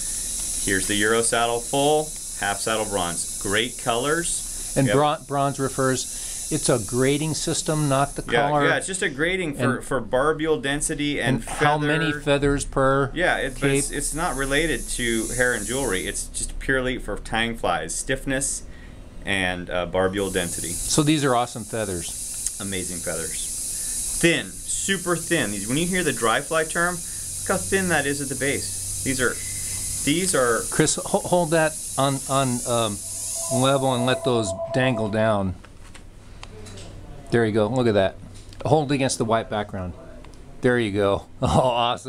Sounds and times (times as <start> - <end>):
Speech: 0.7 - 18.6, 19.3 - 23.5, 24.2 - 29.4, 30.1 - 35.6, 36.6 - 42.0.